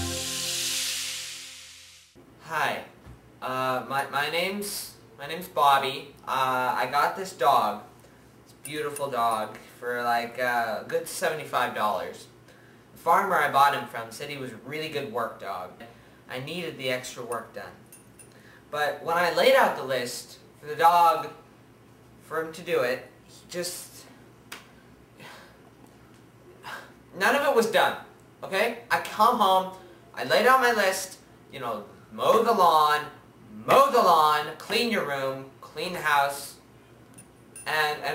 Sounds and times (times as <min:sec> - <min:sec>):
Speech: 0:02.4 - 0:07.9, 0:08.6 - 0:12.4, 0:13.0 - 0:17.8, 0:18.7 - 0:21.4, 0:22.2 - 0:24.2, 0:26.7 - 0:36.6, 0:37.7 - 0:38.1.